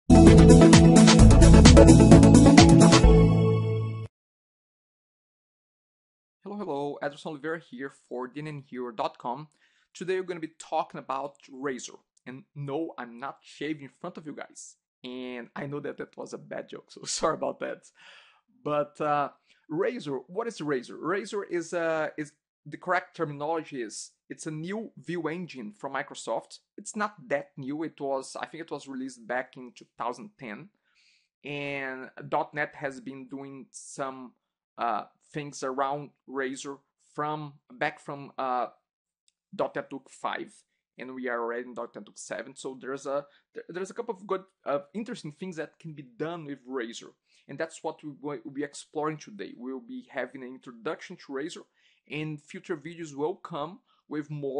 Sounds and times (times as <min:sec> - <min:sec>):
Music: 0:00.1 - 0:04.1
Speech: 0:06.5 - 0:18.0, 0:18.7 - 0:30.7, 0:31.5 - 0:38.7, 0:39.6 - 0:54.5.